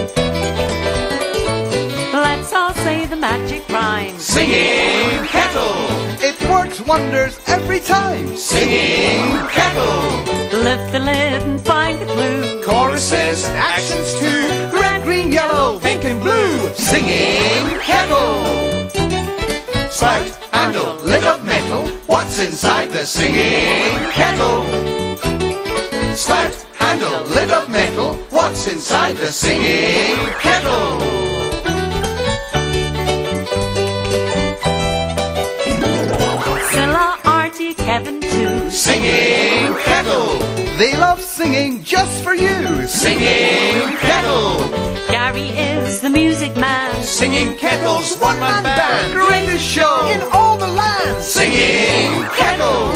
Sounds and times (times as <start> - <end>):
Music: 0.0 - 52.9
Male singing: 12.2 - 18.5, 19.9 - 24.6, 26.2 - 29.7, 47.1 - 52.9.